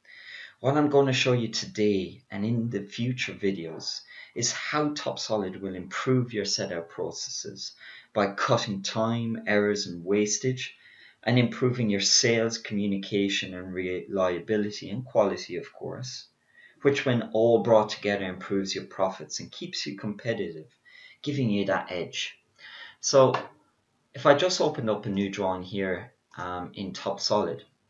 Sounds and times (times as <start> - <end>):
Speech: 0.5 - 23.5, 24.2 - 27.6.